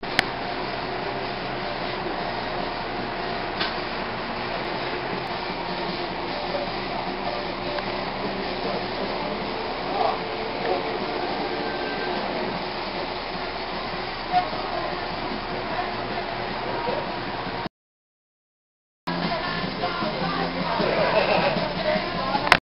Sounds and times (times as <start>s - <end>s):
Music: 0.0s - 17.7s, 19.1s - 22.6s
Speech: 14.3s - 17.2s.